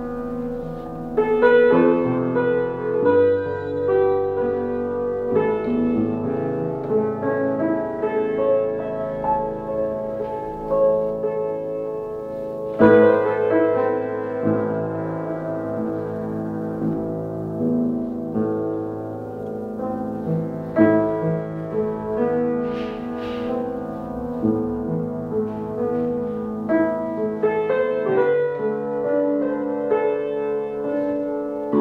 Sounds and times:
Music: 0.0s - 31.8s.

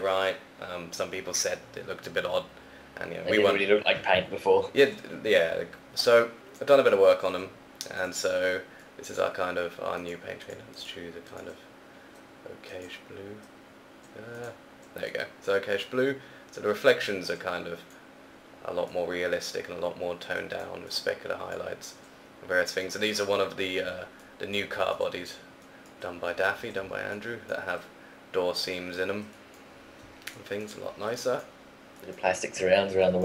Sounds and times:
Speech: 0.0s - 11.6s, 12.4s - 13.4s, 14.1s - 17.8s, 18.6s - 25.4s, 26.0s - 29.3s, 30.4s - 33.2s.

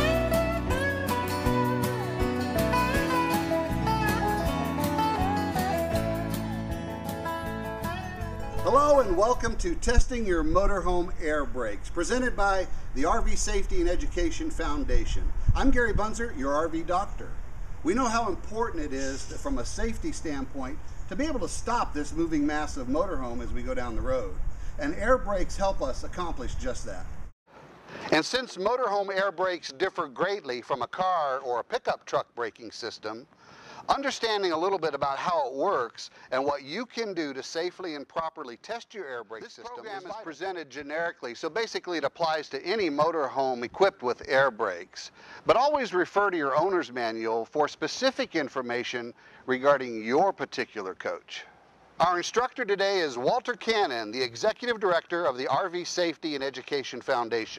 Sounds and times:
Speech: 8.6s - 27.1s, 28.1s - 33.3s, 33.9s - 57.5s.

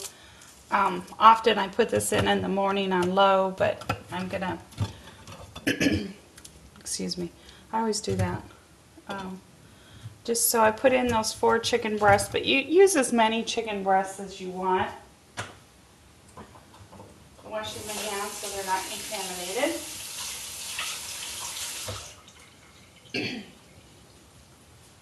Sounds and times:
Speech: 0.7s - 4.6s, 6.8s - 9.4s, 10.3s - 15.0s, 17.4s - 19.9s.

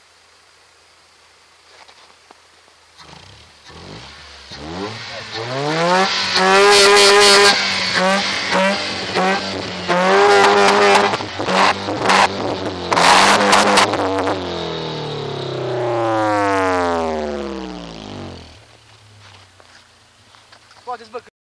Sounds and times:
Speech: 20.8s - 21.3s.

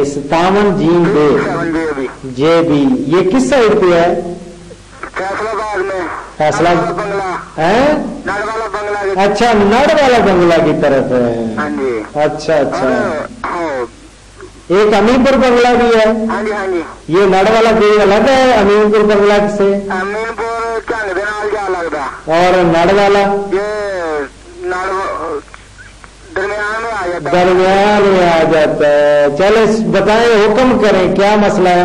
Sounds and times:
Speech: 0.0s - 4.4s, 5.0s - 14.0s, 14.7s - 25.5s, 26.3s - 31.8s.

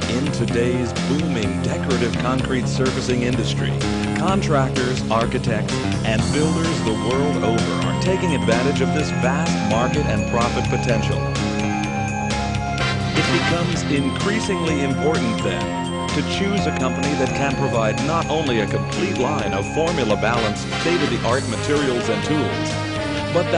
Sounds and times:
Speech: 0.0s - 11.2s, 13.2s - 15.6s, 16.2s - 22.7s, 23.3s - 23.5s
Music: 0.0s - 23.5s.

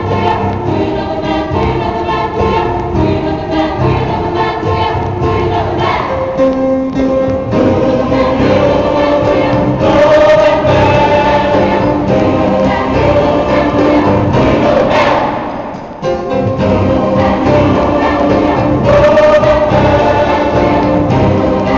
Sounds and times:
Choir: 0.0s - 6.5s, 7.4s - 21.7s
Gospel music: 0.0s - 21.7s
Piano: 0.0s - 21.7s.

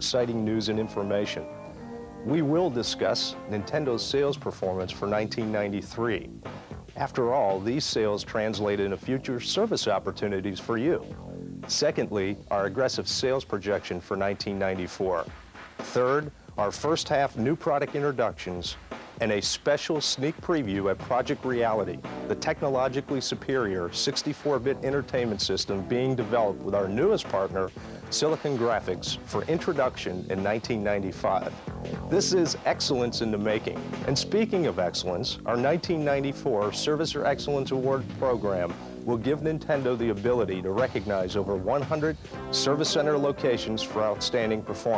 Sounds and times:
Speech: 0.0s - 1.5s, 2.2s - 44.9s
Music: 0.0s - 44.9s.

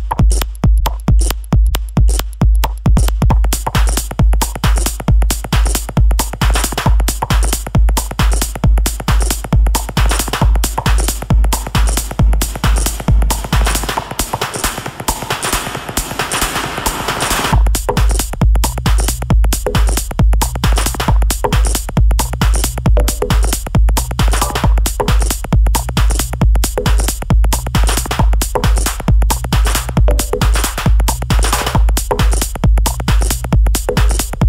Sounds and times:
Music: 0.0s - 34.4s.

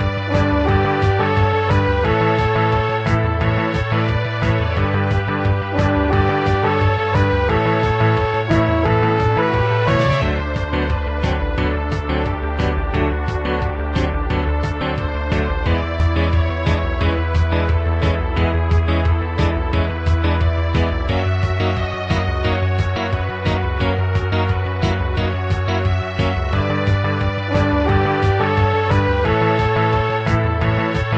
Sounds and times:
Music: 0.0s - 31.1s.

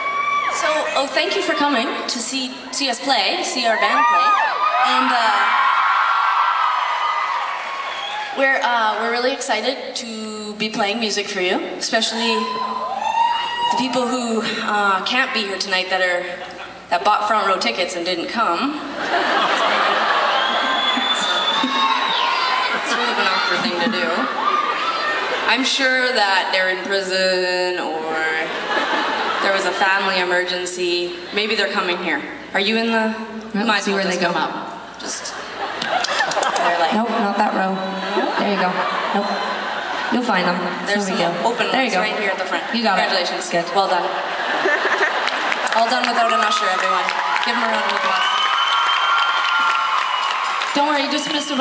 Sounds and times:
Speech: 8.4s - 12.6s, 13.7s - 18.8s, 25.5s - 28.5s, 40.1s - 44.2s.

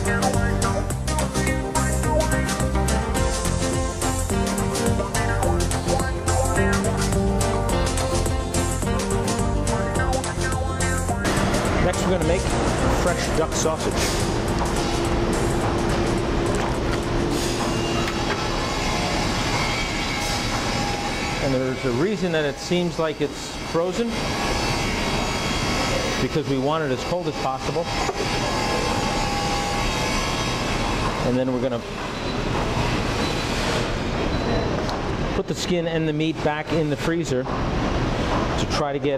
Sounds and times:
Music: 0.0s - 19.7s
Speech: 11.8s - 14.0s, 21.4s - 24.2s, 26.2s - 28.0s, 31.2s - 31.9s, 35.4s - 37.5s, 38.6s - 39.1s.

